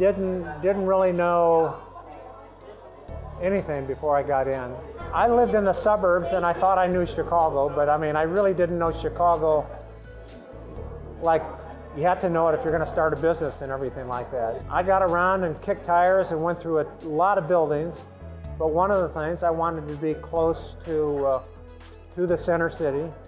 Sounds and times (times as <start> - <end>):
Speech: 0.0 - 2.7, 3.3 - 9.8, 11.2 - 18.0, 18.6 - 21.5, 22.2 - 23.2
Music: 0.0 - 23.2.